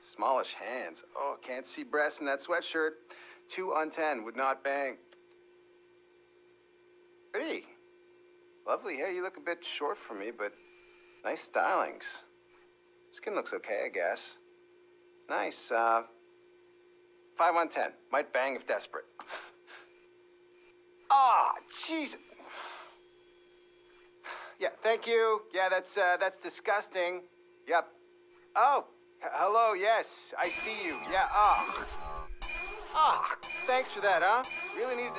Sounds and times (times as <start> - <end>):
Speech: 0.0 - 5.0, 7.3 - 7.8, 8.6 - 10.6, 11.2 - 12.3, 13.1 - 14.4, 15.3 - 16.2, 17.4 - 19.2, 21.1 - 22.2, 24.6 - 28.0, 28.6 - 31.8, 33.0 - 35.1.